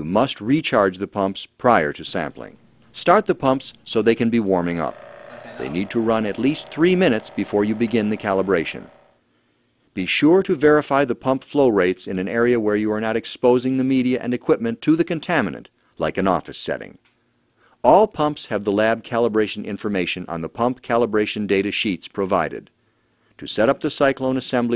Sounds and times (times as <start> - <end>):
Speech: 0.0 - 8.9, 10.0 - 17.0, 17.8 - 22.7, 23.4 - 24.7.